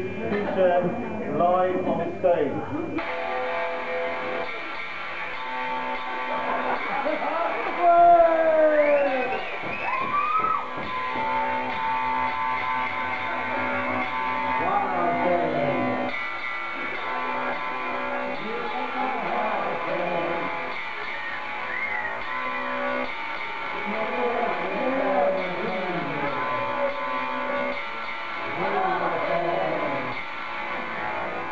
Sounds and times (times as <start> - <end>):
Electric guitar: 2.7 - 31.5.